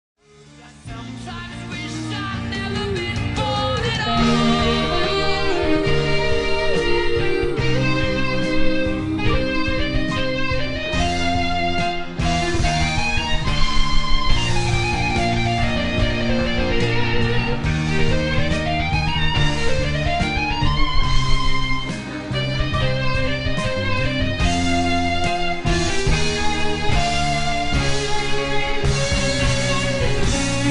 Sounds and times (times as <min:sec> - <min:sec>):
Guitar: 0:00.2 - 0:30.7
Singing: 0:00.6 - 0:09.9.